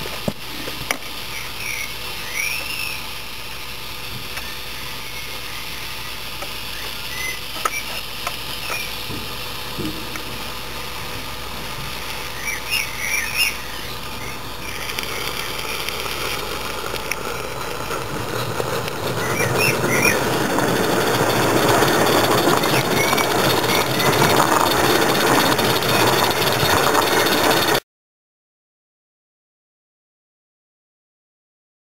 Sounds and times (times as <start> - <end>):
Train: 8.7 - 15.5, 16.1 - 27.8.